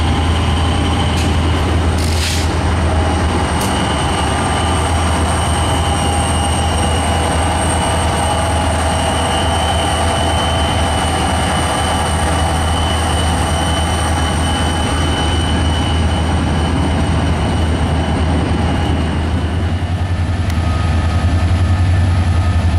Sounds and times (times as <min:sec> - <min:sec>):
Train: 0:00.0 - 0:22.7.